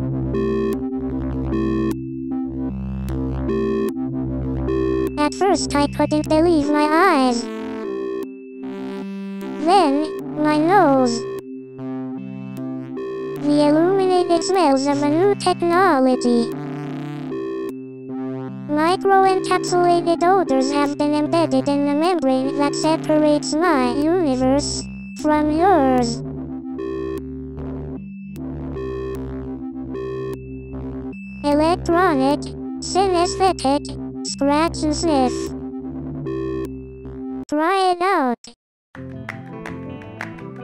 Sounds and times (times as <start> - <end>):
Synthesizer: 0.0 - 37.4
Speech: 5.2 - 7.5, 9.6 - 11.3, 13.4 - 16.6, 18.7 - 26.2, 31.5 - 35.5, 37.5 - 38.6.